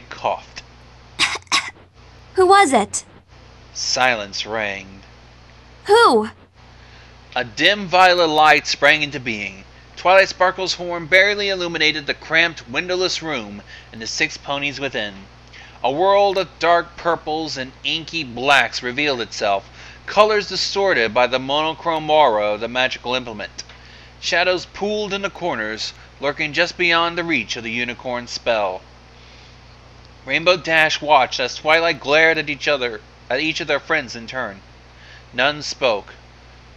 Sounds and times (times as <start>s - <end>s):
Speech: 0.0s - 0.6s, 1.2s - 1.7s, 2.4s - 3.0s, 3.8s - 5.0s, 5.9s - 6.3s, 7.4s - 23.6s, 24.2s - 28.8s, 30.3s - 34.6s, 35.4s - 36.2s.